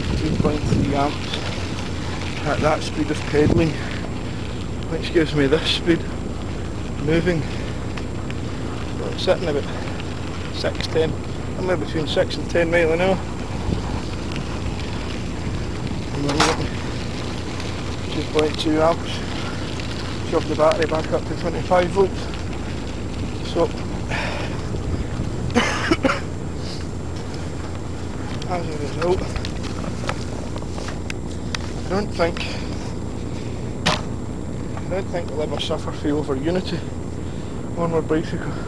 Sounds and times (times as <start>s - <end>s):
Bicycle: 0.0s - 38.6s
Speech: 0.1s - 1.4s, 2.4s - 3.9s, 4.9s - 6.1s, 7.0s - 7.5s, 9.0s - 9.9s, 10.5s - 13.2s, 16.1s - 16.7s, 18.1s - 19.3s, 20.2s - 22.3s, 23.4s - 23.8s, 28.4s - 29.3s, 31.9s - 32.7s, 34.9s - 36.9s, 37.8s - 38.6s.